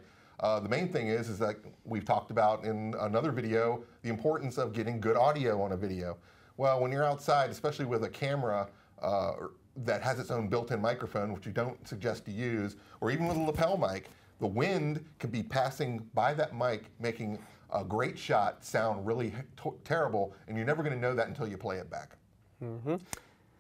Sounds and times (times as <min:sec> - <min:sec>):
Speech: 0:00.4 - 0:23.0.